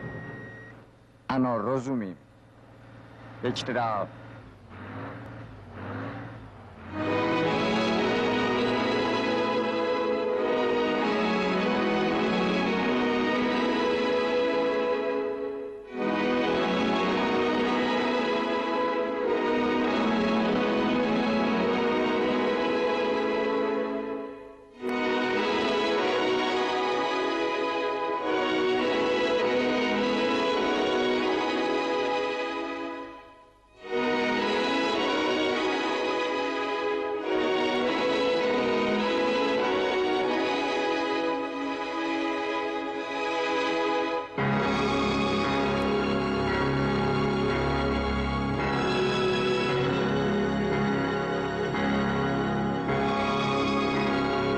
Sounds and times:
Background music: 0:03.1 - 0:54.5.

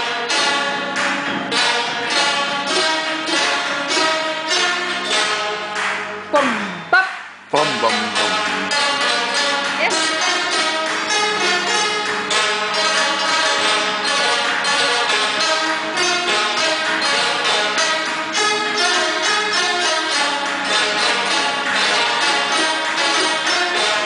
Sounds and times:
Zither: 0:00.0 - 0:06.8, 0:07.5 - 0:24.0
Pizzicato: 0:00.0 - 0:24.0.

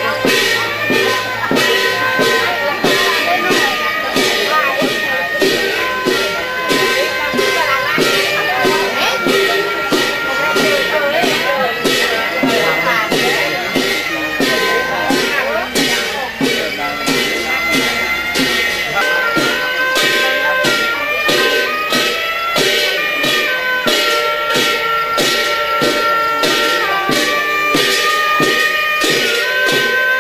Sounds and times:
Music: 0:00.0 - 0:30.2
Speech: 0:00.0 - 0:30.2.

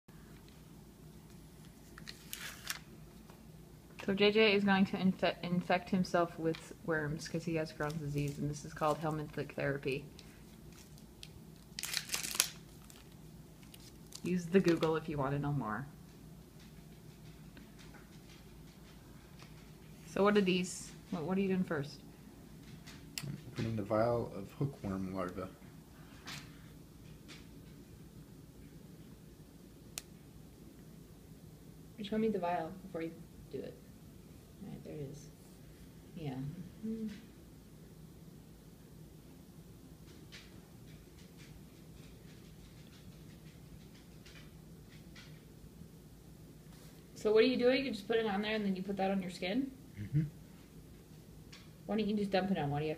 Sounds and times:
Inside, small room: 0:00.1 - 0:52.9.

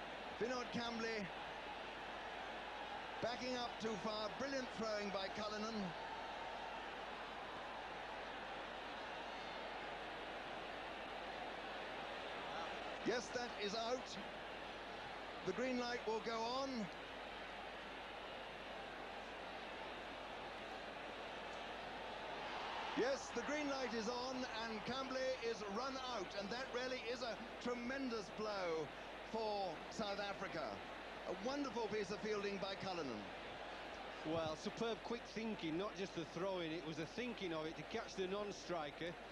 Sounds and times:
Speech: 0:00.4 - 0:01.3, 0:03.2 - 0:05.9, 0:13.1 - 0:14.2, 0:15.5 - 0:16.9, 0:23.0 - 0:33.3, 0:34.2 - 0:39.2.

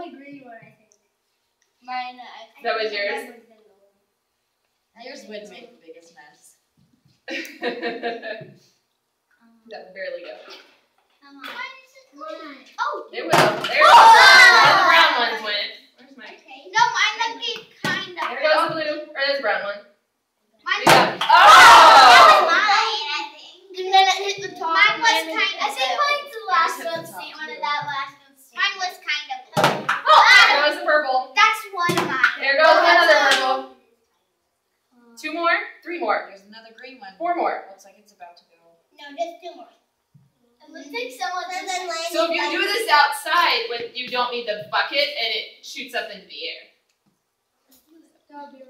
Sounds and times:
Child speech, kid speaking: 0:00.0 - 0:00.9, 0:01.8 - 0:04.0, 0:05.0 - 0:06.5, 0:09.4 - 0:19.2, 0:20.5 - 0:21.2, 0:22.1 - 0:34.0, 0:37.6 - 0:39.8, 0:40.4 - 0:44.0, 0:47.7 - 0:48.7
Inside, small room: 0:00.0 - 0:48.7.

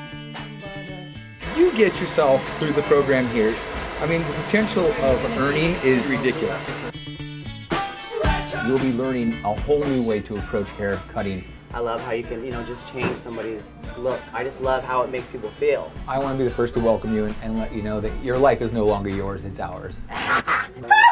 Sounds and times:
Music: 0:00.0 - 0:21.1
Speech: 0:01.5 - 0:06.8, 0:08.5 - 0:20.0.

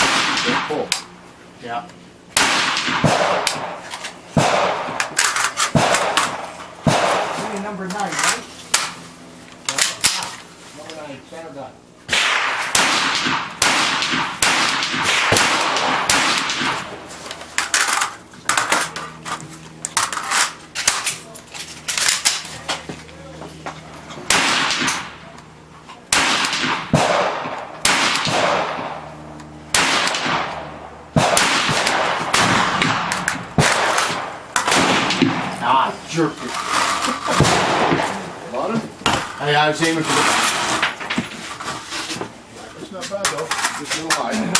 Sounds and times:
Speech: 0:42.6 - 0:44.5.

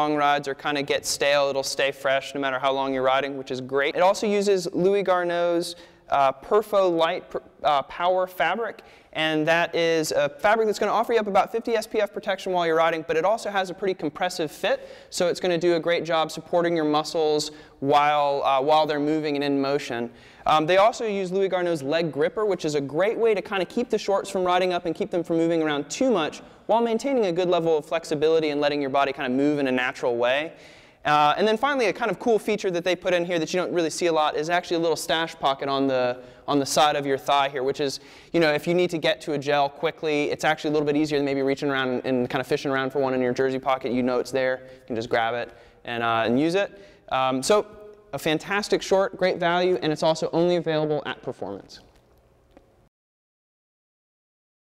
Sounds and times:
Speech: 0:00.0 - 0:51.9.

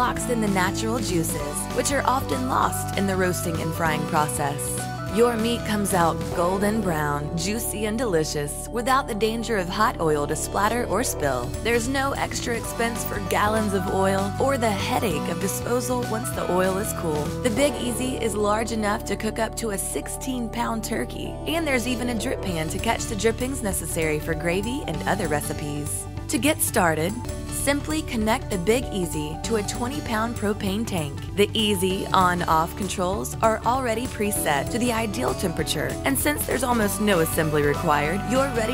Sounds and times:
Music: 0:00.0 - 0:38.7
Speech: 0:00.0 - 0:38.7.

